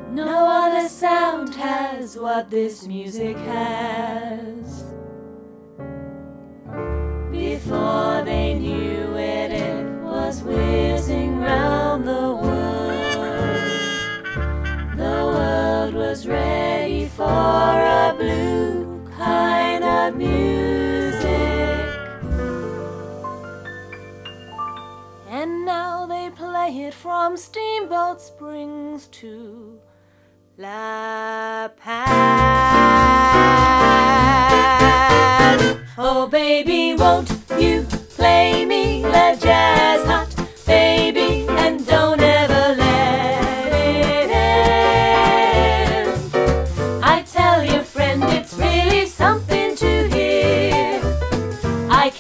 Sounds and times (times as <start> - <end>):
Music: 0.0 - 30.7, 31.8 - 52.2
Singing: 7.4 - 14.0, 15.0 - 22.2, 30.6 - 46.3, 47.0 - 51.1.